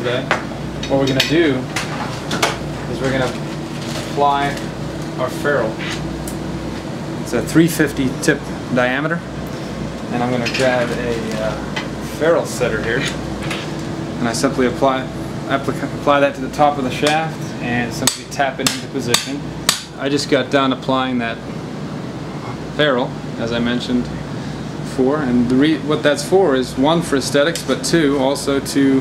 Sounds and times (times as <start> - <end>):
Speech: 0.0 - 1.7, 2.9 - 3.4, 4.1 - 6.0, 7.3 - 9.3, 10.1 - 13.2, 14.2 - 19.4, 20.0 - 21.4, 22.4 - 24.1, 24.9 - 29.0.